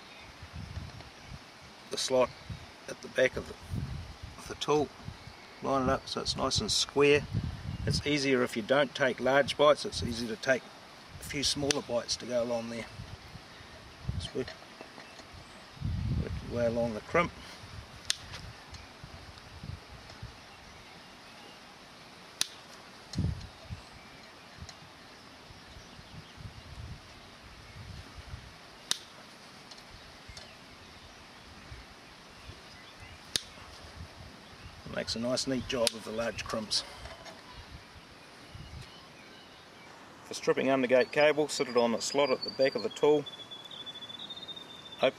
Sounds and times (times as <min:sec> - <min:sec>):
Outside, rural or natural: 0:00.0 - 0:45.1
Speech: 0:01.9 - 0:02.3, 0:02.9 - 0:03.6, 0:04.4 - 0:04.9, 0:05.6 - 0:07.3, 0:07.9 - 0:10.6, 0:11.2 - 0:12.9, 0:14.2 - 0:14.5, 0:16.2 - 0:17.4, 0:34.9 - 0:36.9, 0:40.3 - 0:43.3.